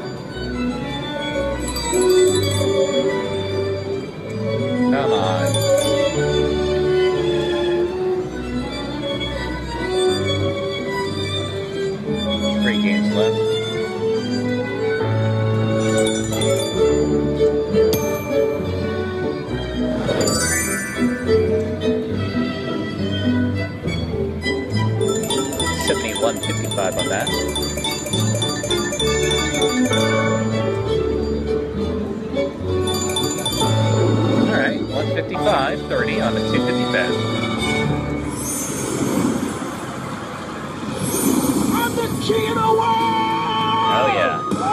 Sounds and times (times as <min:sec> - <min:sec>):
Music: 0:00.0 - 0:41.2, 0:41.8 - 0:44.7
Speech: 0:25.9 - 0:27.3, 0:34.5 - 0:37.2.